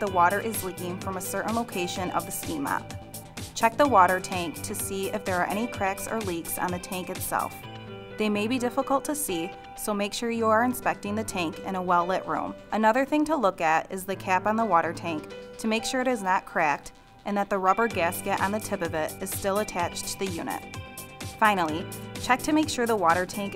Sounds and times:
Speech: 0.0s - 2.8s, 3.6s - 7.6s, 8.2s - 20.6s, 21.4s - 23.5s
Music: 0.0s - 23.5s.

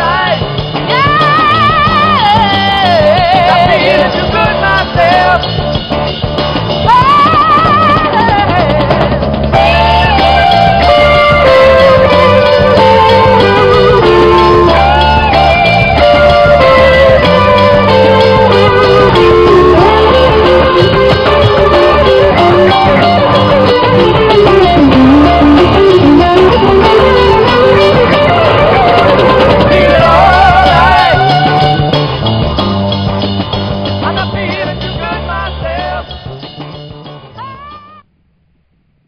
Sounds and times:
Funk: 0.0s - 38.1s.

